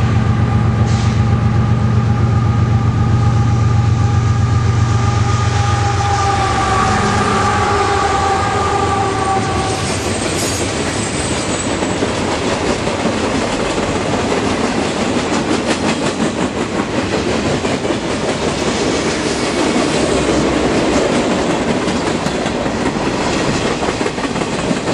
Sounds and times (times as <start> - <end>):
Railroad car, train wagon: 0.0 - 24.9
Train: 0.0 - 24.9
Clickety-clack: 9.6 - 24.9.